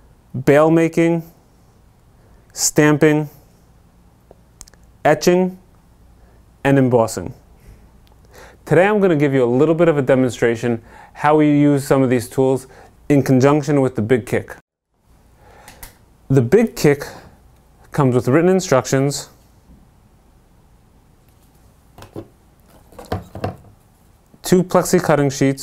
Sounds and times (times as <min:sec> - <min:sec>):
Speech: 0:00.3 - 0:01.4, 0:02.5 - 0:03.4, 0:05.0 - 0:05.7, 0:06.6 - 0:07.4, 0:08.6 - 0:14.6, 0:16.3 - 0:19.4, 0:24.4 - 0:25.6.